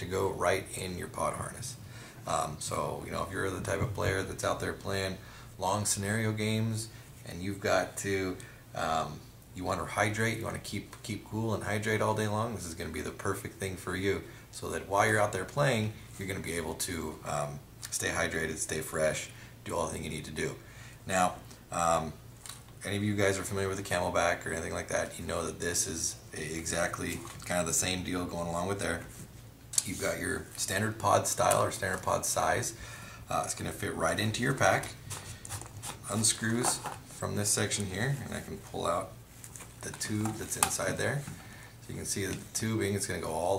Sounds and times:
Speech: 0:00.0 - 0:22.2, 0:22.8 - 0:29.2, 0:29.8 - 0:35.0, 0:35.9 - 0:39.2, 0:39.8 - 0:43.5.

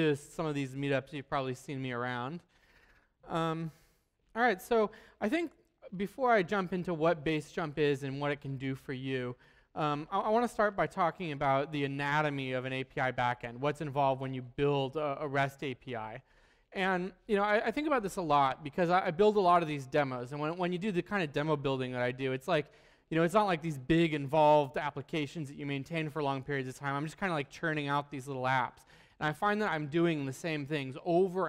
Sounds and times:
Speech: 0:00.0 - 0:02.5, 0:03.2 - 0:31.4.

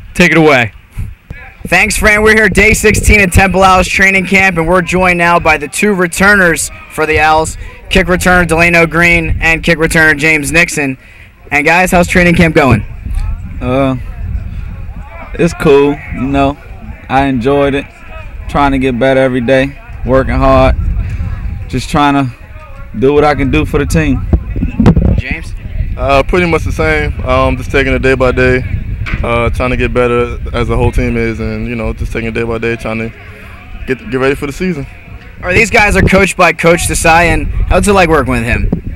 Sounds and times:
Speech: 0:00.2 - 0:12.9, 0:21.7 - 0:38.7.

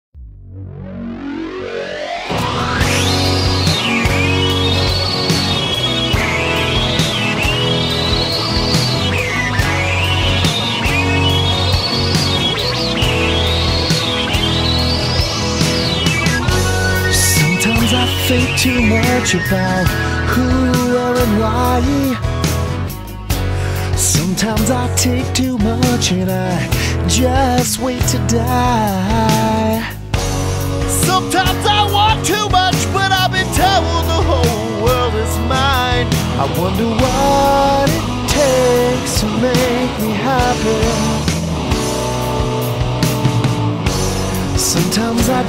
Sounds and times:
Rock music: 0:00.2 - 0:45.4.

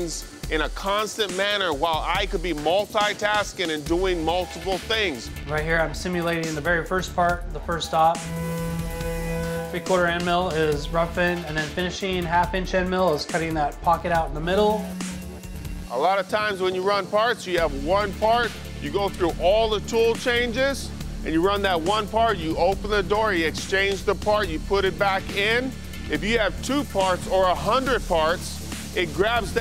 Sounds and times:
Speech: 0:00.0 - 0:08.2, 0:09.8 - 0:14.9, 0:15.9 - 0:29.6
Music: 0:00.0 - 0:29.6.

